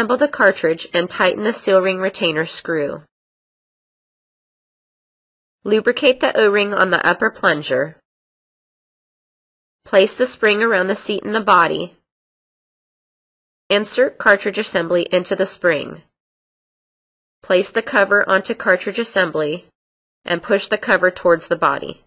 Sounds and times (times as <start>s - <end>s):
Speech synthesizer: 0.0s - 3.1s, 5.7s - 8.0s, 9.9s - 12.0s, 13.7s - 16.1s, 17.4s - 19.7s, 20.3s - 22.0s.